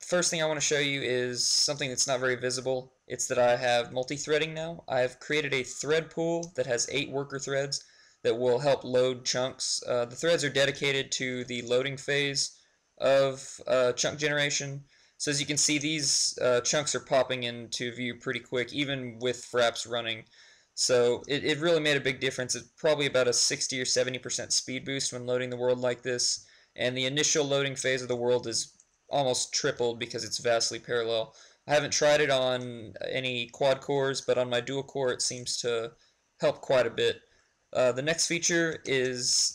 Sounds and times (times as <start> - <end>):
Speech: 0.0 - 20.2, 20.8 - 37.2, 37.8 - 39.5.